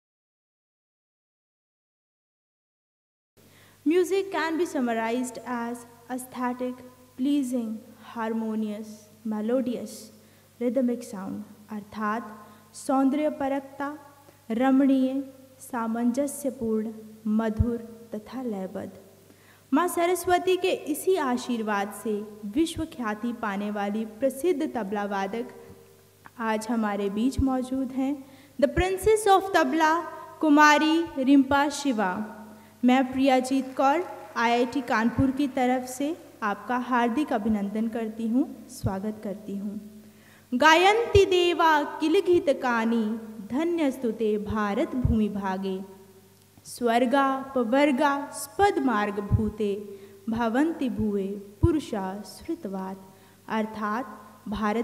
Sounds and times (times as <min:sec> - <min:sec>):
Speech: 0:03.9 - 0:19.0, 0:19.7 - 0:25.6, 0:26.4 - 0:39.9, 0:40.6 - 0:46.0, 0:46.6 - 0:54.8.